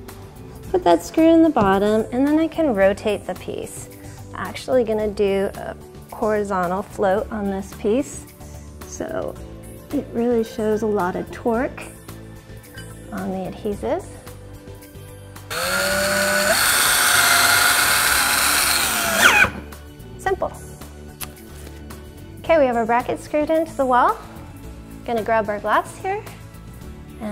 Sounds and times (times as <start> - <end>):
Music: 0.0 - 27.3
Speech: 0.7 - 3.8, 4.4 - 8.2, 8.9 - 11.9, 13.1 - 14.1, 20.2 - 20.6, 22.4 - 24.2, 25.1 - 26.4
Power tool: 15.5 - 19.7.